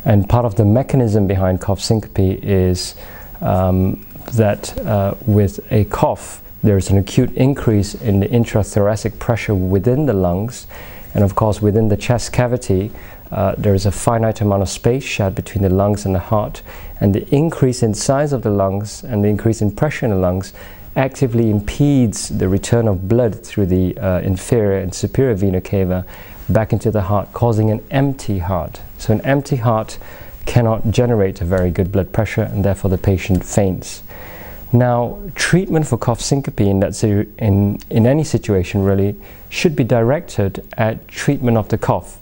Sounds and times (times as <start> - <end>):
Speech: 0.0 - 34.1, 34.7 - 42.2.